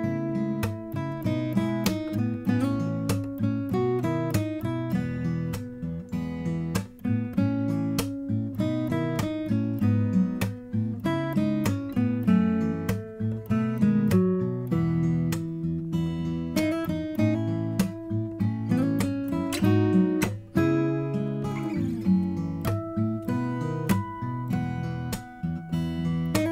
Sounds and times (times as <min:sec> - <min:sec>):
Acoustic guitar: 0:00.0 - 0:26.5.